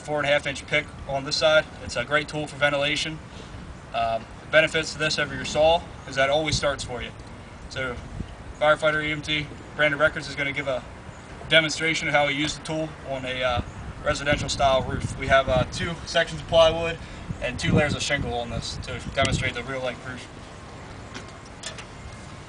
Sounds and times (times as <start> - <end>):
Speech: 0.0 - 3.2, 3.9 - 8.0, 8.6 - 10.9, 11.5 - 20.3.